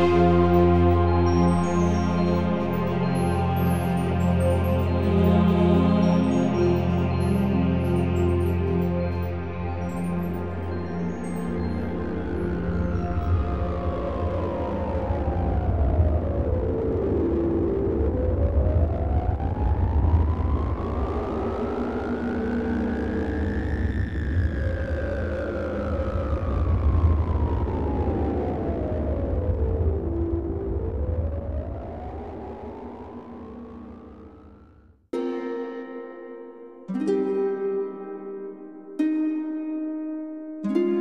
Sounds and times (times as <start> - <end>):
Music: 0.0 - 41.0.